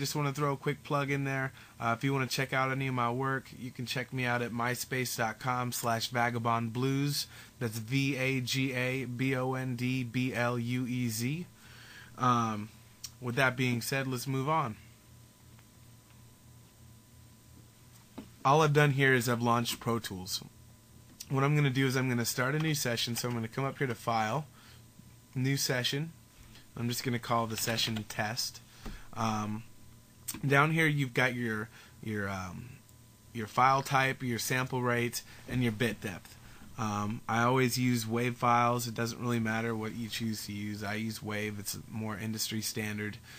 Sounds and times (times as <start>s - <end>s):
Speech: 0.0s - 11.5s, 12.2s - 14.8s, 18.4s - 20.5s, 21.2s - 24.5s, 25.3s - 26.2s, 26.8s - 28.6s, 29.2s - 29.7s, 30.3s - 43.2s.